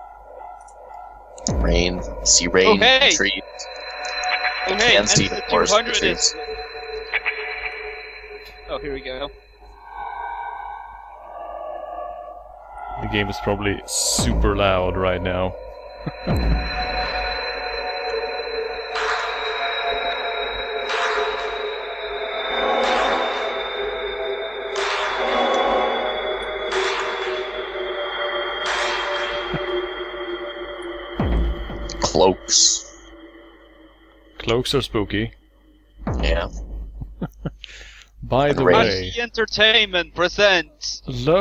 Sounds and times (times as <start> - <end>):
Speech: 1.5 - 6.4, 8.7 - 9.3, 13.0 - 16.4, 31.9 - 32.9, 34.4 - 35.4, 36.2 - 36.6, 37.2 - 41.4.